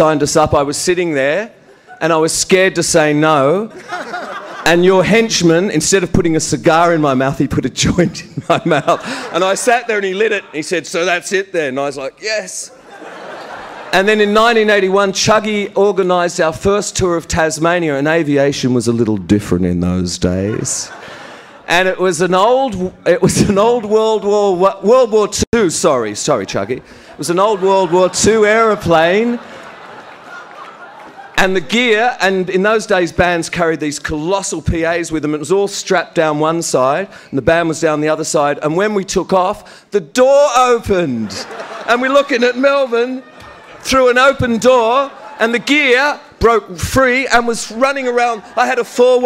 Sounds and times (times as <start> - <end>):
Male speech, man speaking: 0.0 - 3.8, 4.6 - 8.3, 9.3 - 12.8, 13.9 - 21.0, 21.7 - 29.4, 31.4 - 49.2
Narration, monologue: 0.0 - 49.2.